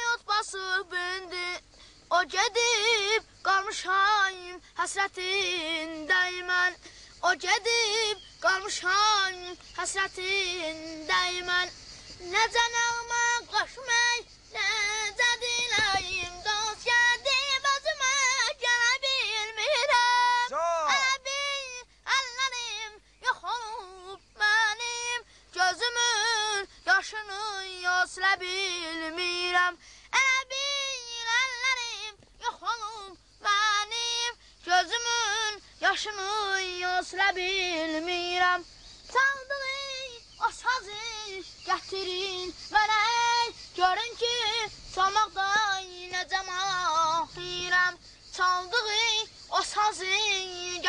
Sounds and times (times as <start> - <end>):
Child singing: 0.0 - 50.8.